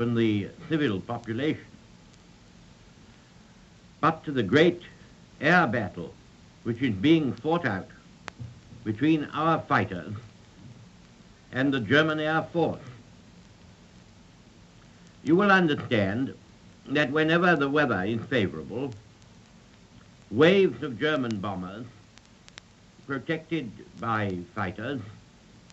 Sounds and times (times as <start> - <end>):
Male speech, man speaking: 0.0 - 1.7, 4.0 - 8.0, 8.9 - 10.3, 11.6 - 13.0, 15.3 - 19.0, 20.3 - 22.0, 23.1 - 25.2.